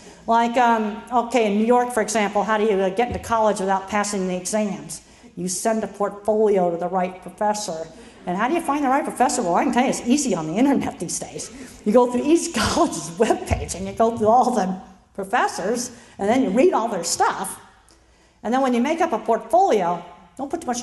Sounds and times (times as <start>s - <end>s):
Narration, monologue: 0.0s - 20.8s
Female speech, woman speaking: 0.3s - 17.6s, 18.5s - 20.8s.